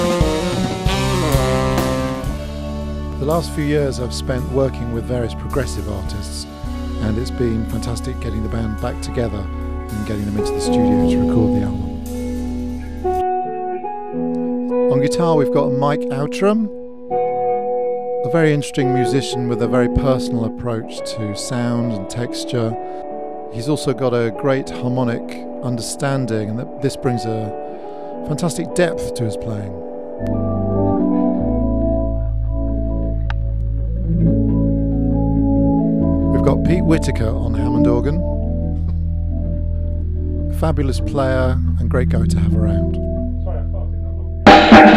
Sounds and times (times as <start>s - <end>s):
Electronic organ: 0.0s - 44.9s
Speech: 3.2s - 11.9s, 14.9s - 16.7s, 18.2s - 22.8s, 23.5s - 27.6s, 28.2s - 29.8s, 36.3s - 38.3s, 40.5s - 44.9s.